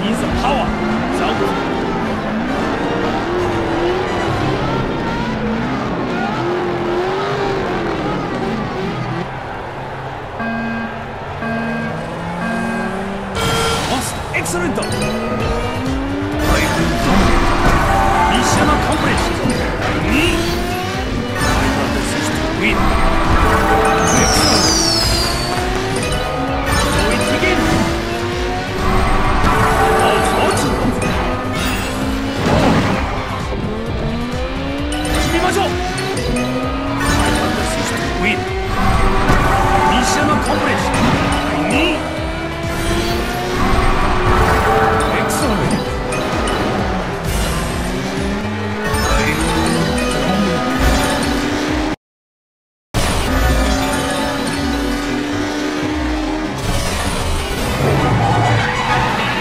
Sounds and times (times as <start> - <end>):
Music: 8.2 - 52.0, 53.0 - 59.4
Speech: 37.2 - 38.4, 45.1 - 45.8.